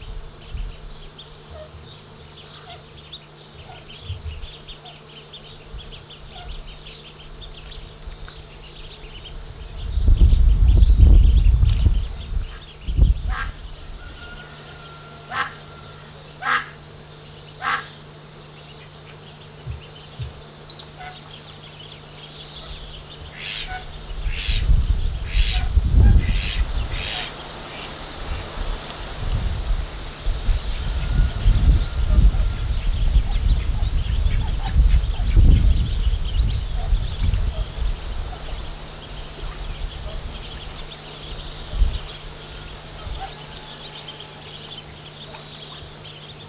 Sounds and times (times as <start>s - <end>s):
Bird: 0.0s - 28.6s, 30.6s - 46.4s
Goose: 14.2s - 16.8s, 17.6s - 17.9s, 21.0s - 21.2s
Duck: 16.4s - 16.7s, 17.6s - 17.9s.